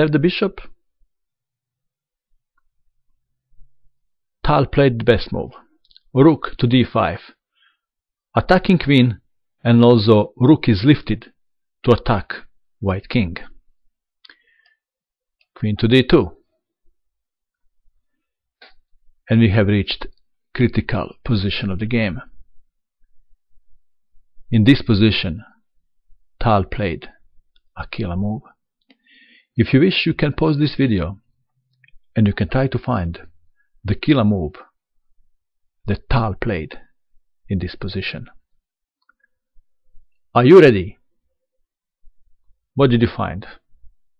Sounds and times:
Narration, monologue: 0.0 - 44.1.

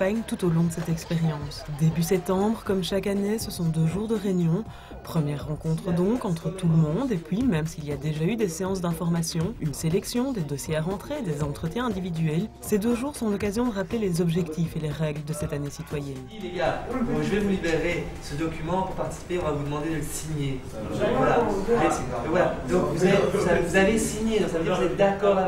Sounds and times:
Music: 0.0 - 25.4
Speech: 0.0 - 25.4.

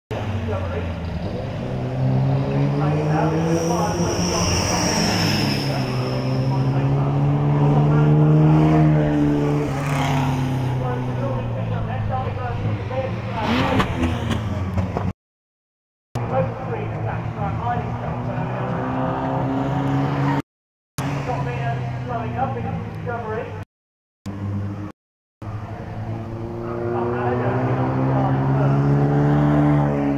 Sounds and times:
Speech: 0.1 - 1.0, 2.6 - 10.0, 10.7 - 13.9, 16.2 - 19.0, 21.2 - 23.6, 26.9 - 28.9
Race car, auto racing: 0.1 - 15.1, 16.2 - 20.4, 21.0 - 23.6, 24.3 - 30.1
Outside, urban or manmade: 0.1 - 15.2, 16.1 - 30.1.

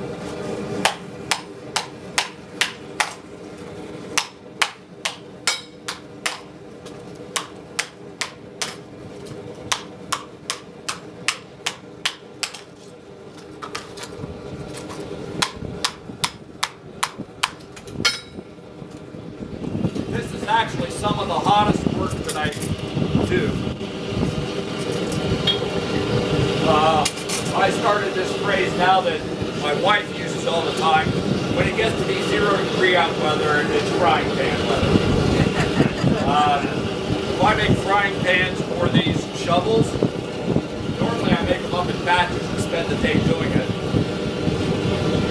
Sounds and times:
Speech: 20.1 - 23.6, 26.6 - 34.9, 36.2 - 36.8, 37.4 - 40.0, 41.0 - 43.8.

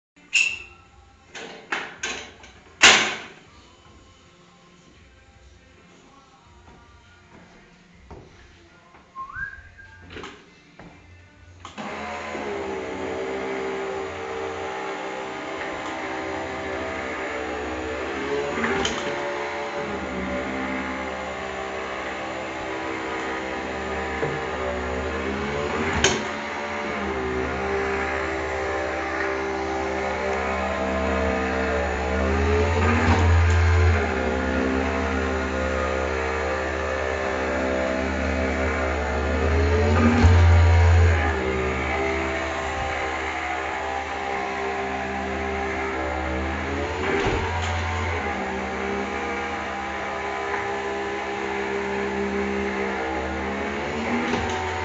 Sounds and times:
Whistling: 0.3 - 0.8, 9.2 - 10.2.

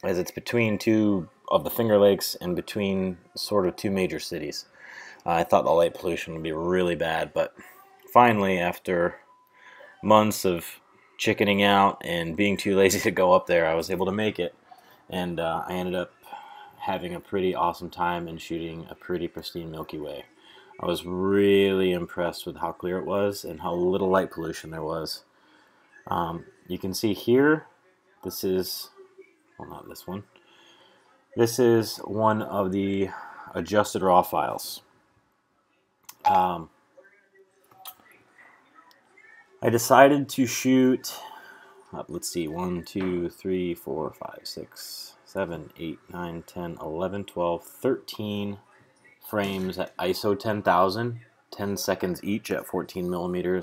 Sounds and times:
Speech: 0.0 - 25.3, 26.0 - 30.3, 31.4 - 34.9, 36.1 - 53.6.

